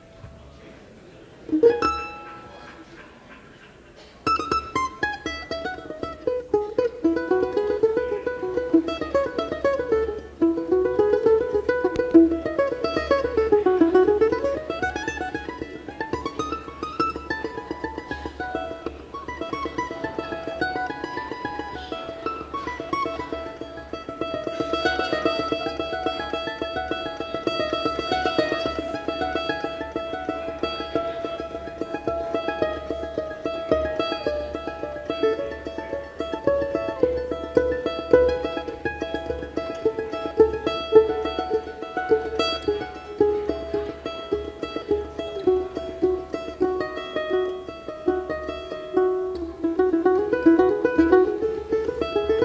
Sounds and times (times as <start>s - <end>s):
Mandolin: 0.0s - 52.4s.